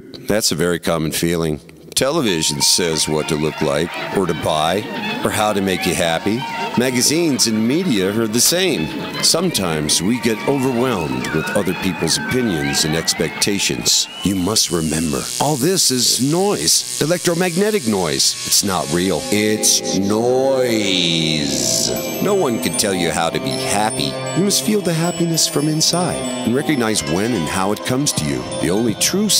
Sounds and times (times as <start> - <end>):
Speech: 0.2 - 29.3
Musical instrument: 17.3 - 29.3.